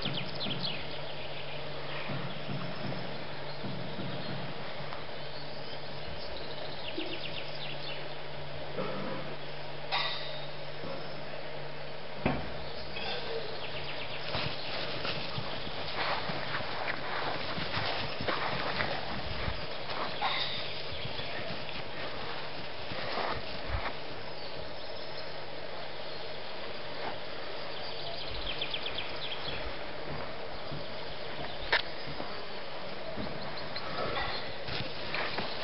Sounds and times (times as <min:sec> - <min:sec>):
Animal: 0:17.7 - 0:22.2, 0:33.5 - 0:35.6.